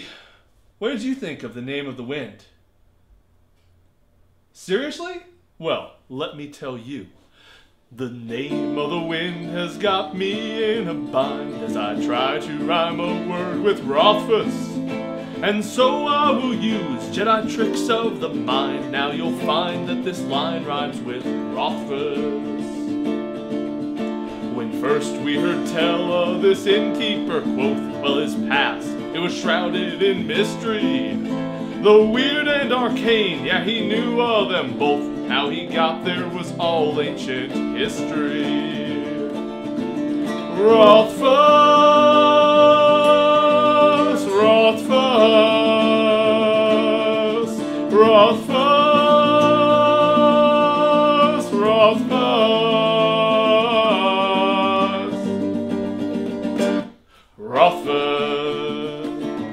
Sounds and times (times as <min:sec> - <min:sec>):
Music: 0:08.3 - 0:59.5.